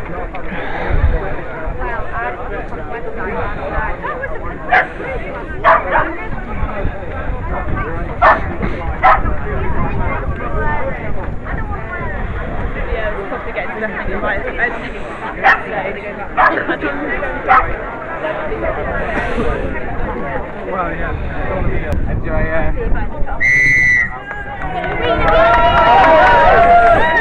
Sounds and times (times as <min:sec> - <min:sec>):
Speech: 0:00.0 - 0:23.4
Outside, urban or manmade: 0:00.0 - 0:27.2.